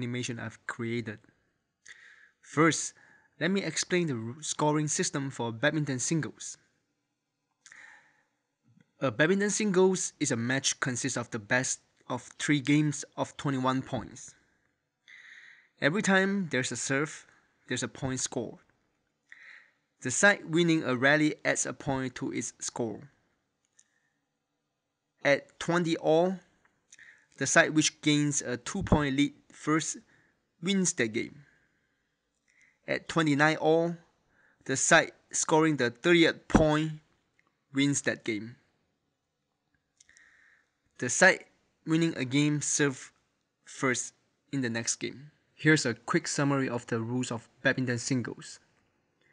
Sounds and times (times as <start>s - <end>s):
Speech: 0.0s - 1.3s, 2.5s - 6.7s, 9.0s - 14.4s, 15.8s - 18.7s, 20.0s - 23.2s, 25.2s - 26.5s, 27.4s - 31.5s, 32.9s - 34.1s, 34.7s - 37.1s, 37.7s - 38.7s, 41.0s - 48.7s.